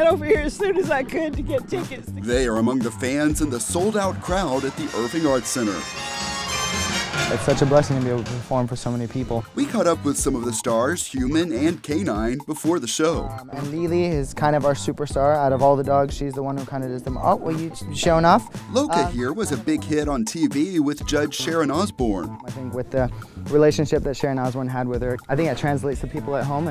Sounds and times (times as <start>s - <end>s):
Speech: 0.0s - 5.8s, 7.3s - 26.7s
Music: 0.0s - 26.7s.